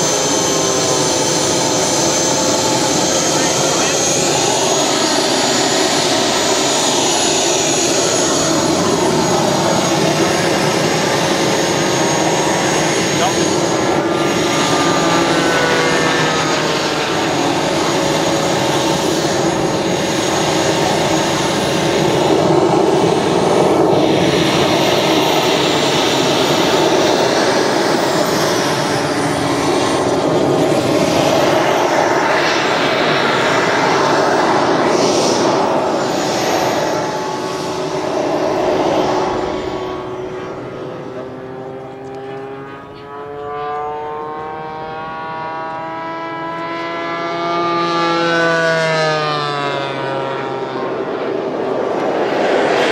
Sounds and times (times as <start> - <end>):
Aircraft engine: 0.0 - 52.9
Fixed-wing aircraft, airplane: 0.0 - 52.9.